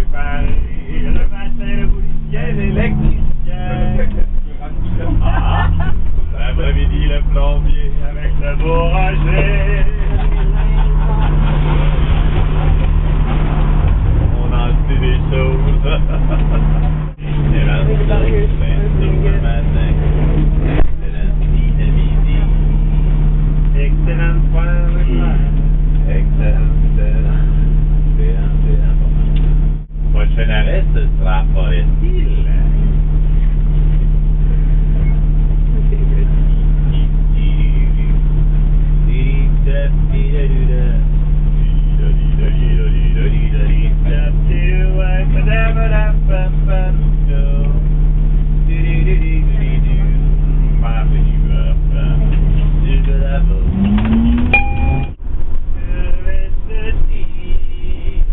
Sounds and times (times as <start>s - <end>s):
Speech: 0.0s - 12.2s, 14.4s - 16.6s, 17.2s - 22.7s, 23.7s - 29.4s, 30.1s - 33.0s, 34.8s - 38.2s, 39.1s - 47.9s, 48.7s - 53.8s, 55.8s - 58.3s
Bus: 0.0s - 58.3s.